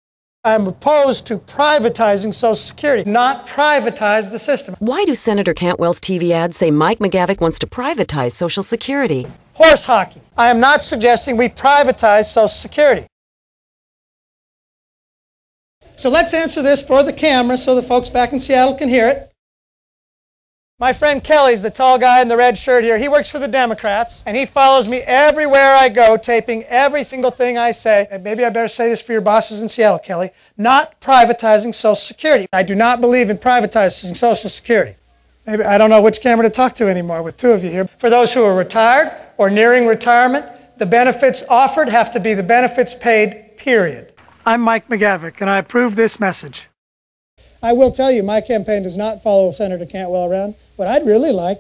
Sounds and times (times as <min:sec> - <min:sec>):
Speech: 0:00.5 - 0:13.1, 0:16.0 - 0:19.3, 0:20.8 - 0:46.8, 0:47.6 - 0:51.6.